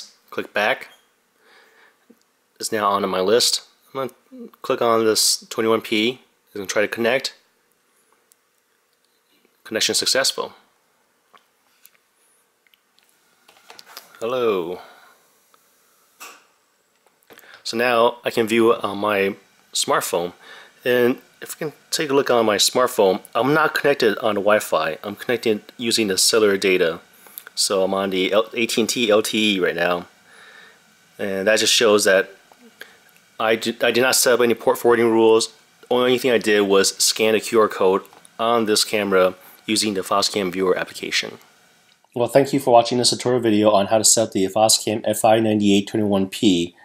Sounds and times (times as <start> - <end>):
Speech: 0.0 - 1.0, 2.6 - 7.5, 9.6 - 10.7, 14.2 - 15.0, 17.6 - 30.1, 31.2 - 32.8, 33.4 - 41.4, 42.1 - 46.8.